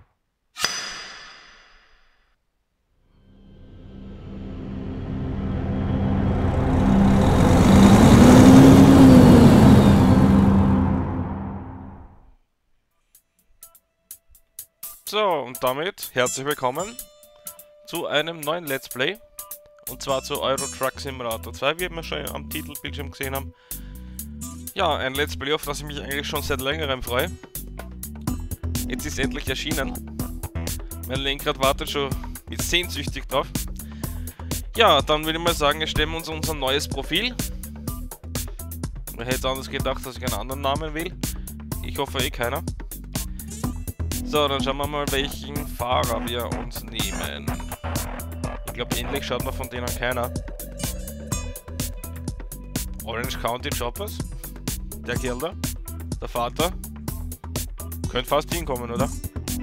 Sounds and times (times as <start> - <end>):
Music: 3.1 - 7.4, 12.8 - 59.6
Speech: 15.0 - 17.0, 17.9 - 19.2, 19.9 - 23.5, 24.8 - 27.3, 28.9 - 30.0, 31.1 - 33.5, 34.7 - 37.4, 39.2 - 41.2, 41.8 - 42.6, 44.3 - 47.5, 48.8 - 50.3, 53.0 - 54.2, 55.1 - 55.6, 56.2 - 56.8, 58.1 - 59.2.